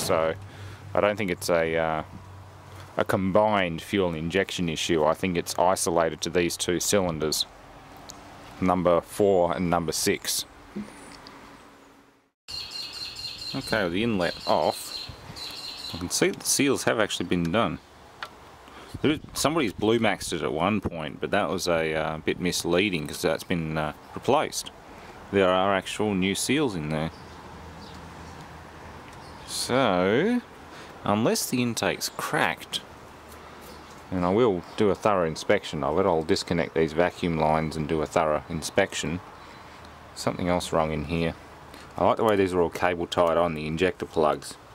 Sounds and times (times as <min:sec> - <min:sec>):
Speech: 0:00.0 - 0:00.4, 0:01.0 - 0:02.2, 0:03.0 - 0:07.5, 0:08.6 - 0:10.9, 0:13.5 - 0:15.0, 0:15.9 - 0:17.8, 0:19.0 - 0:27.2, 0:29.5 - 0:32.8, 0:34.1 - 0:39.2, 0:40.2 - 0:41.4, 0:42.0 - 0:44.6.